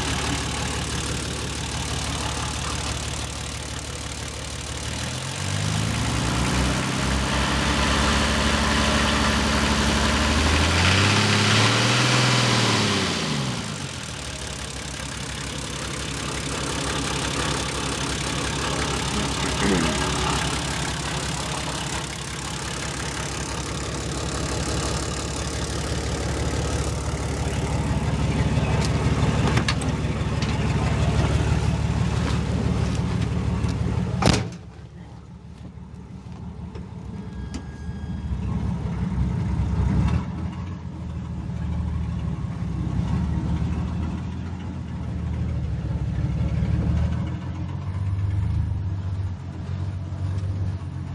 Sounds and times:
Vehicle: 0.0s - 51.1s.

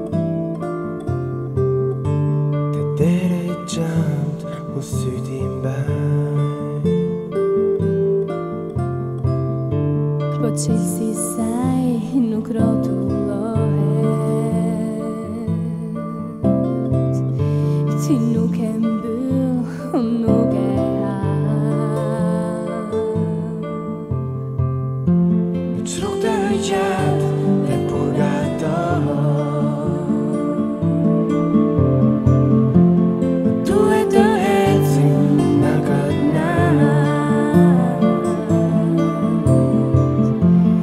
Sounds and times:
Music: 0.0s - 40.8s.

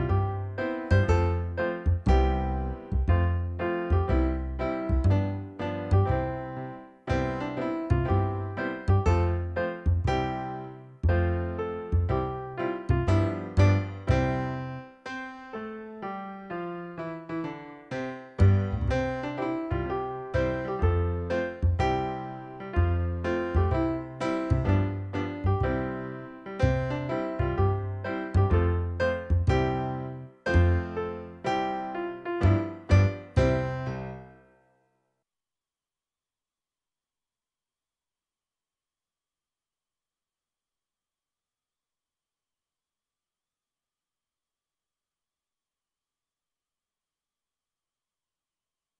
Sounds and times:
Music: 0.0s - 35.2s.

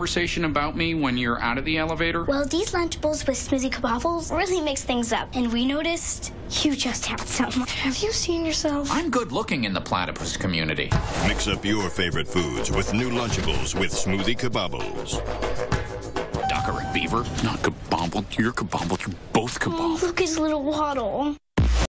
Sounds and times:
Music: 11.0s - 17.8s
Speech: 11.2s - 15.2s.

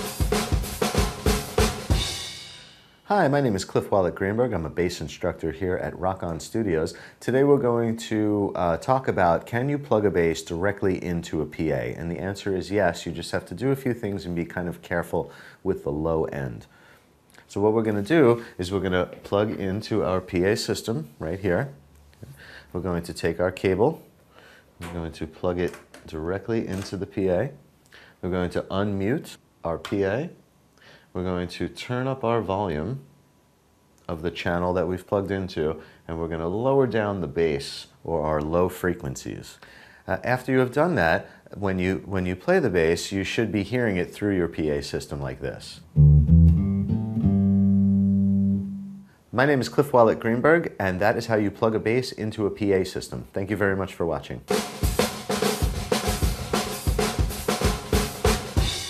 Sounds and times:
Inside, small room: 0.0s - 58.9s
Speech: 3.1s - 16.7s, 17.4s - 21.8s, 22.7s - 24.1s, 24.8s - 27.6s, 28.2s - 30.4s, 31.1s - 33.1s, 34.0s - 45.9s, 49.3s - 54.5s
Bass guitar: 45.8s - 49.1s
Electronic tuner: 45.9s - 49.1s.

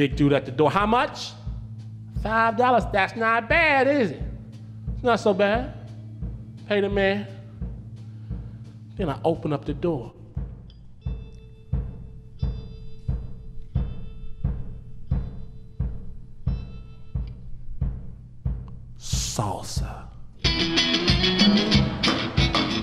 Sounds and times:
Speech: 0.0s - 1.4s, 2.2s - 4.3s, 5.0s - 5.8s, 6.7s - 7.4s, 9.0s - 10.2s, 19.0s - 20.2s.

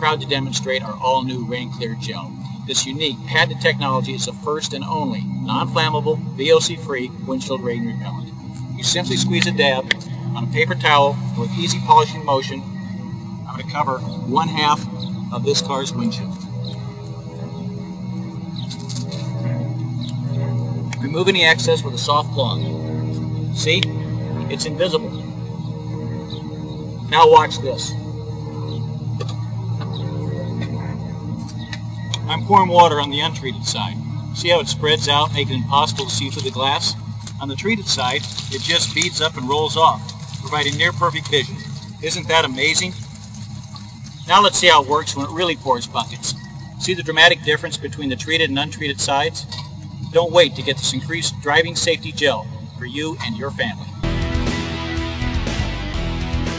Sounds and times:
Speech: 0.0s - 12.7s, 13.5s - 16.4s, 21.0s - 22.7s, 23.6s - 23.9s, 24.5s - 25.2s, 27.1s - 28.0s, 32.3s - 43.0s, 44.3s - 53.9s.

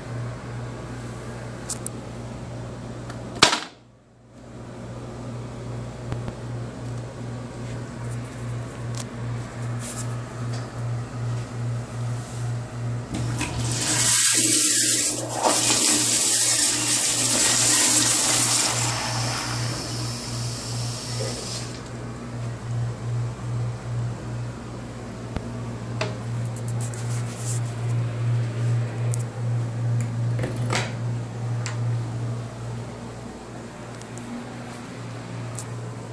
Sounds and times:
Toilet flush: 13.2s - 21.8s.

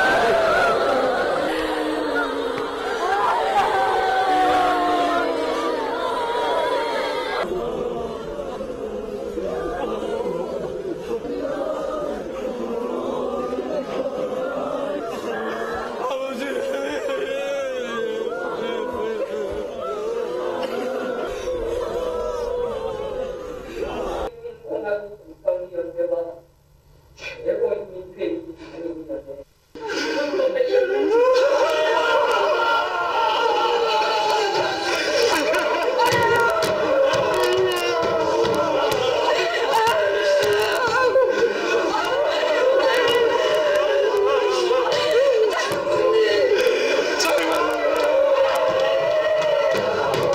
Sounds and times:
Speech: 8.7s - 26.5s, 27.2s - 50.1s.

